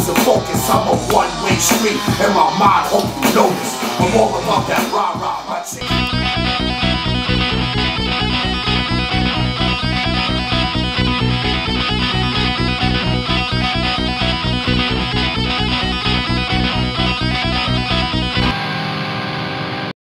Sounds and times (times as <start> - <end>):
Strum: 0.0 - 19.8
Electric guitar: 0.0 - 20.0.